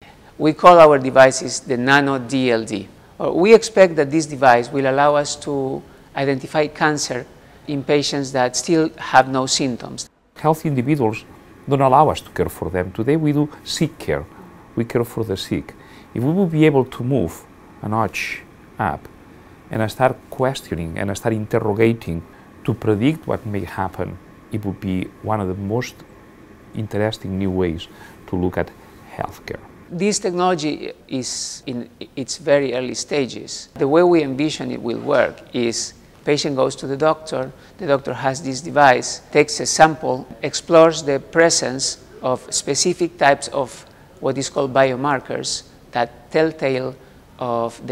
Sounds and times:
Speech: 0.4s - 19.1s, 19.7s - 26.0s, 26.8s - 47.9s.

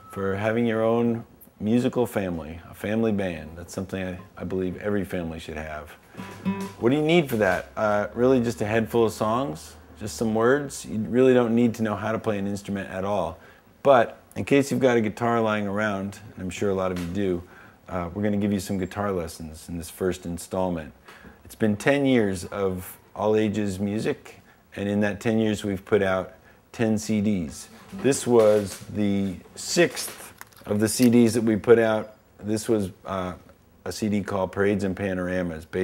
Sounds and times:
Speech: 0.1s - 6.0s, 6.8s - 35.8s.

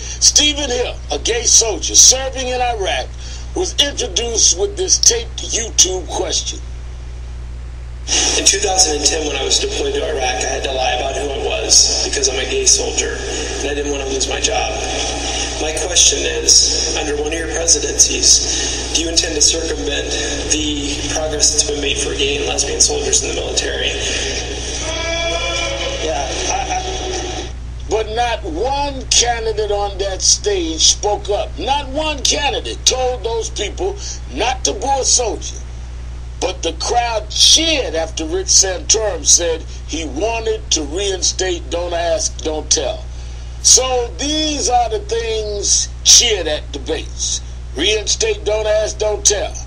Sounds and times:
Speech: 0.0s - 6.6s, 8.1s - 35.6s, 36.4s - 49.6s.

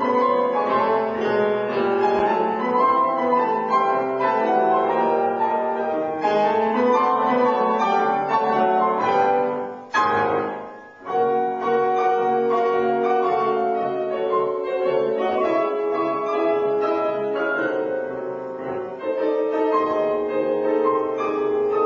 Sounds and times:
New-age music: 0.0s - 21.8s.

